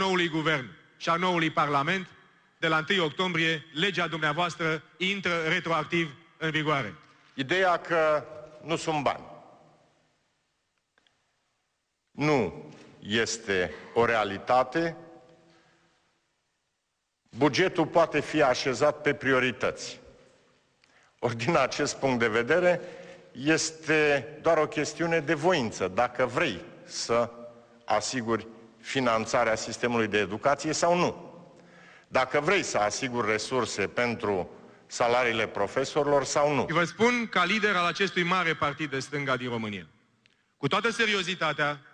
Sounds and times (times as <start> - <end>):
Speech: 0.0 - 9.3, 12.1 - 15.0, 17.3 - 20.1, 21.2 - 31.3, 32.1 - 39.9, 40.6 - 41.9.